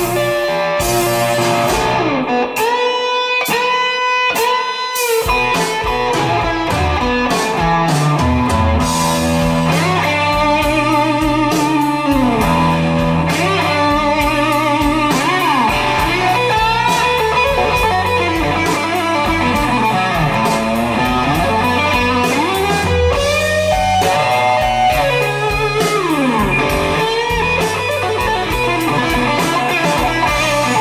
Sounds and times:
Bass guitar: 0:00.0 - 0:30.8
Electric guitar: 0:00.0 - 0:30.8.

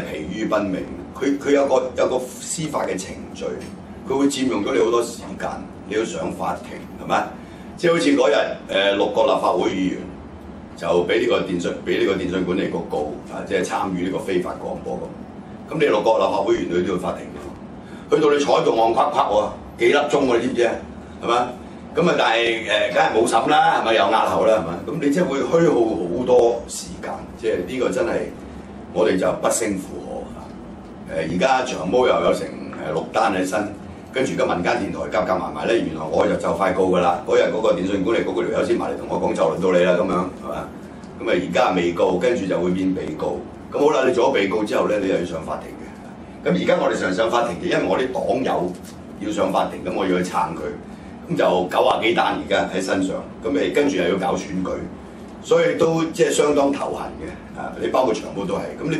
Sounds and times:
Speech: 0:00.0 - 0:10.2, 0:10.8 - 0:58.9.

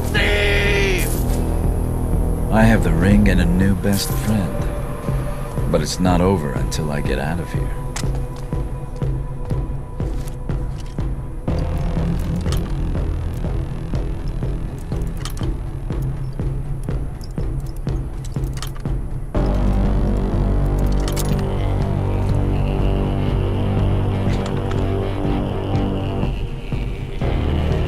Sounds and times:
Speech: 0:00.0 - 0:01.2, 0:02.5 - 0:04.7, 0:05.7 - 0:07.8
Music: 0:00.0 - 0:27.8.

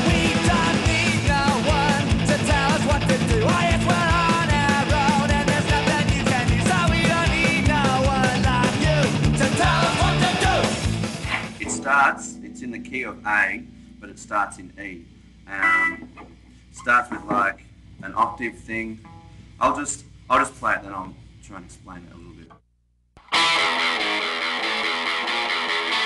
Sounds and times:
Guitar: 0:00.0 - 0:21.0, 0:23.2 - 0:26.0.

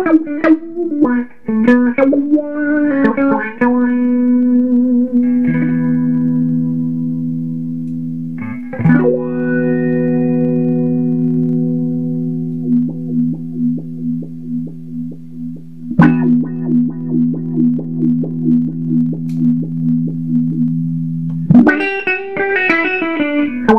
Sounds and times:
Effects unit: 0:00.0 - 0:23.7
Guitar: 0:00.0 - 0:23.7.

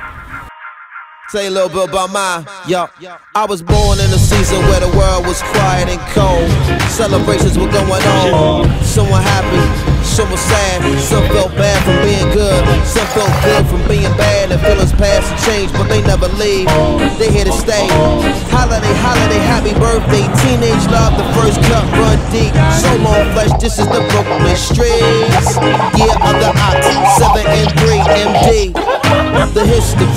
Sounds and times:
Music: 0:00.0 - 0:30.1.

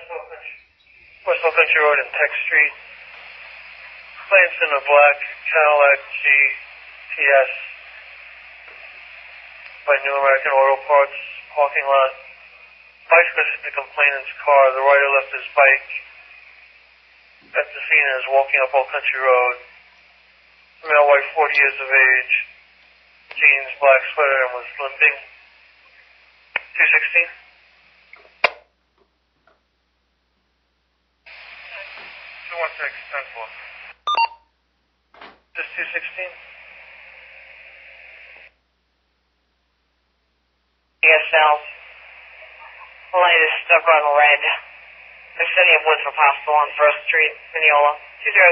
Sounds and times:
Speech: 0:00.0 - 0:00.6, 0:01.2 - 0:02.9, 0:04.2 - 0:07.8, 0:09.8 - 0:12.4, 0:13.1 - 0:16.1, 0:17.4 - 0:19.7, 0:20.8 - 0:22.5, 0:23.3 - 0:25.4, 0:26.6 - 0:27.5, 0:31.7 - 0:33.7, 0:35.6 - 0:36.5, 0:41.0 - 0:44.8, 0:45.4 - 0:48.5.

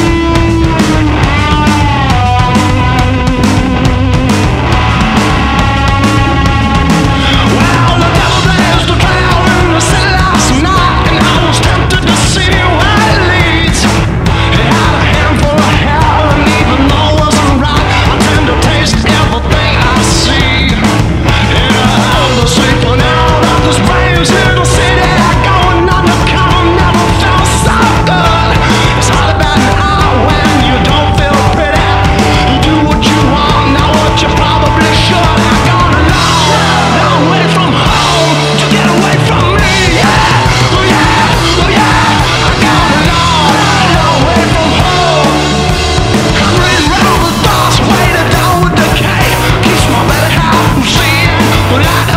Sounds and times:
Music: 0:00.0 - 0:52.1.

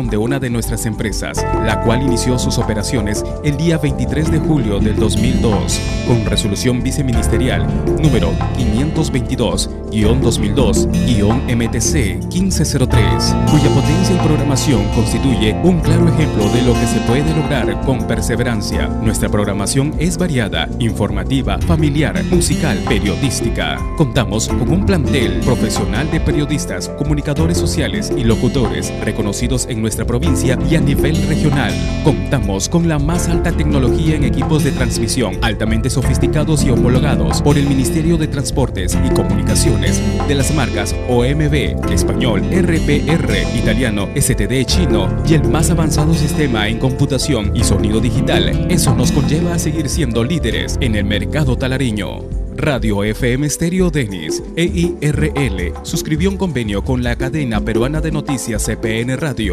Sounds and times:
Music: 0:00.0 - 0:59.5
Speech: 0:00.0 - 0:59.5.

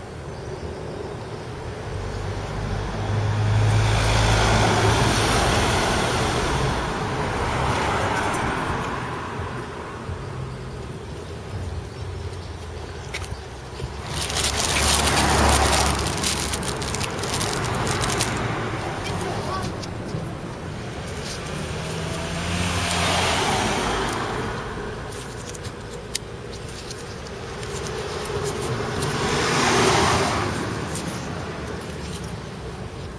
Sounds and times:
Motor vehicle (road): 0:00.0 - 0:33.1.

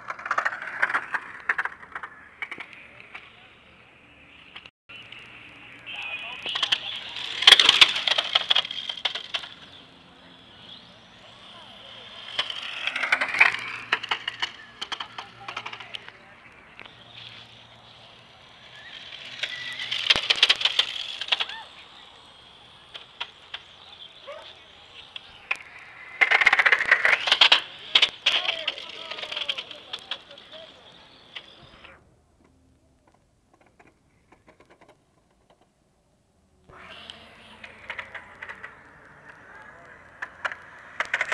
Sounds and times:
Speech: 0:05.7 - 0:07.1, 0:15.0 - 0:16.6, 0:24.2 - 0:24.8, 0:27.8 - 0:32.0, 0:38.0 - 0:40.1.

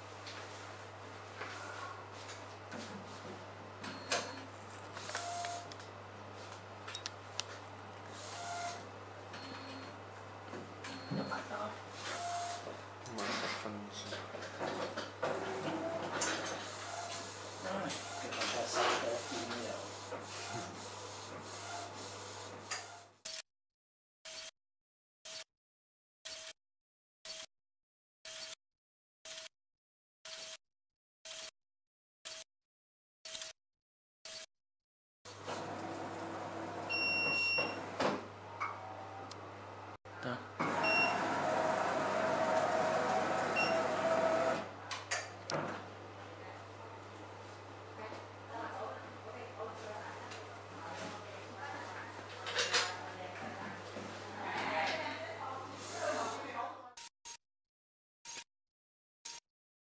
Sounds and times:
Printer: 0:03.8 - 0:05.8, 0:08.1 - 0:09.8, 0:12.0 - 0:13.6, 0:14.5 - 0:23.1, 0:35.3 - 0:38.3, 0:40.6 - 0:44.7
Speech: 0:17.6 - 0:19.9, 0:48.0 - 0:53.8, 0:54.4 - 0:57.0.

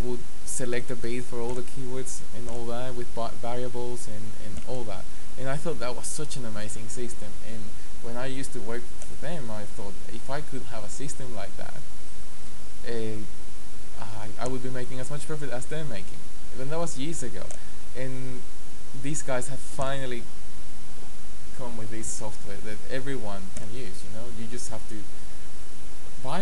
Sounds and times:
Speech: 0:00.0 - 0:11.8, 0:12.8 - 0:13.3, 0:14.0 - 0:18.4, 0:19.0 - 0:20.3, 0:21.6 - 0:25.1, 0:26.2 - 0:26.4.

